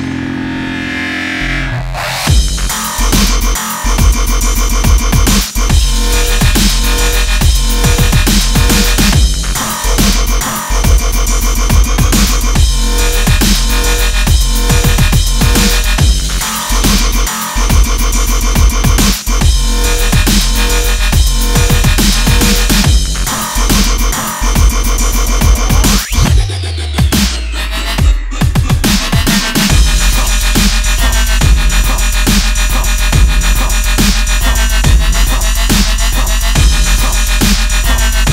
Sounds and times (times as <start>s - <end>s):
Drum and bass: 0.0s - 38.3s
Dubstep: 0.0s - 38.3s.